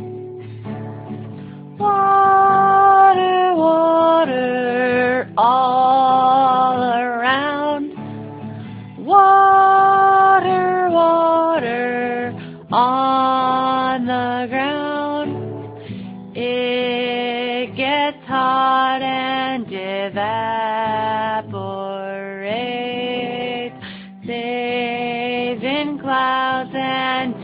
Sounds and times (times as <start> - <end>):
Music: 0.0 - 27.4.